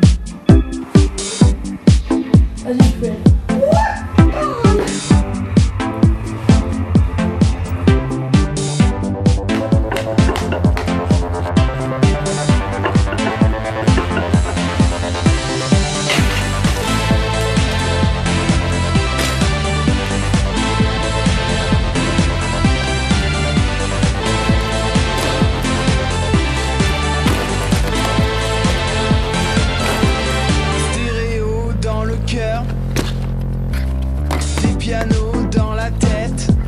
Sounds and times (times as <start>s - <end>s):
Music: 0.0s - 36.6s.